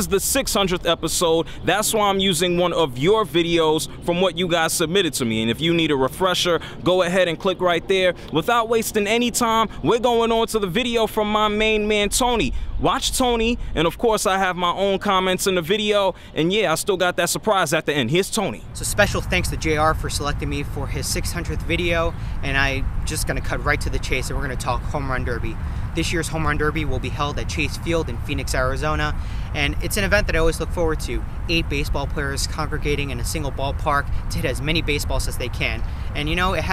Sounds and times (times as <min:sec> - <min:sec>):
Speech: 0:00.0 - 0:36.7.